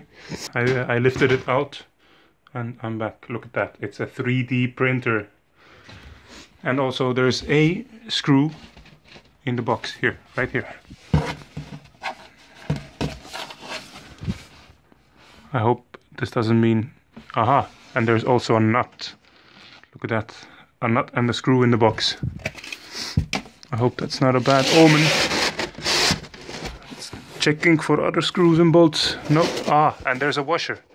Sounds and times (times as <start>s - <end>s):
Speech: 0.4s - 1.9s, 2.5s - 5.4s, 6.6s - 8.7s, 9.4s - 10.8s, 15.5s - 19.2s, 20.0s - 22.3s, 23.7s - 25.4s, 27.0s - 30.9s.